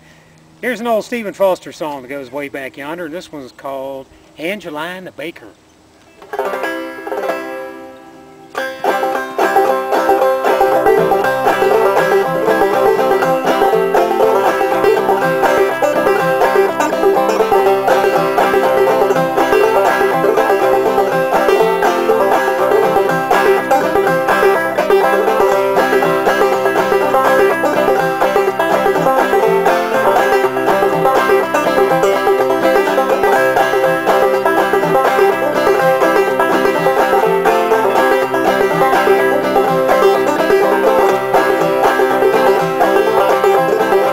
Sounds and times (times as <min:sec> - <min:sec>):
Speech: 0:00.6 - 0:05.6
Guitar: 0:06.0 - 0:44.1
Banjo: 0:06.2 - 0:44.1
Mandolin: 0:06.2 - 0:44.1.